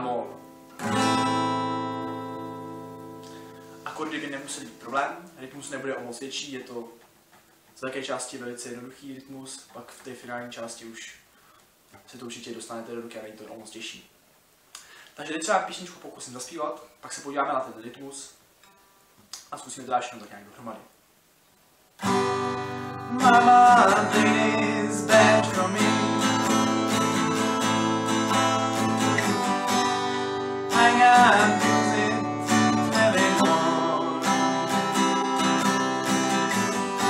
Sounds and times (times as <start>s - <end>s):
Speech: 0.0s - 0.4s, 3.9s - 7.0s, 7.8s - 11.2s, 12.0s - 14.1s, 15.2s - 18.4s, 19.4s - 20.9s.